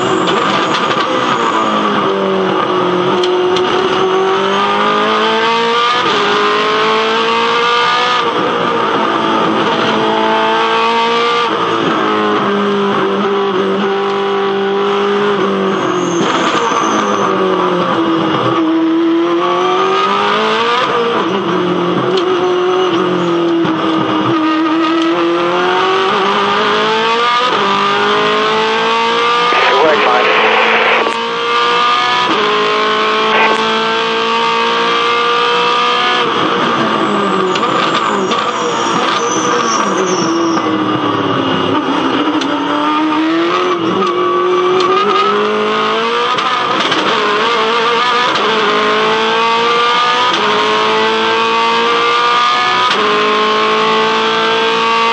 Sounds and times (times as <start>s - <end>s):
Car: 0.0s - 55.1s.